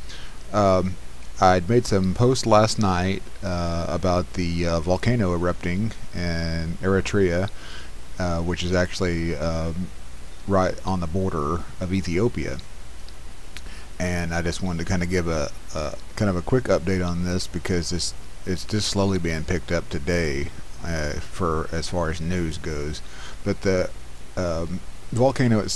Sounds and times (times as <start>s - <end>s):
Speech: 0.5s - 7.6s, 8.2s - 9.9s, 10.5s - 12.7s, 14.0s - 25.7s.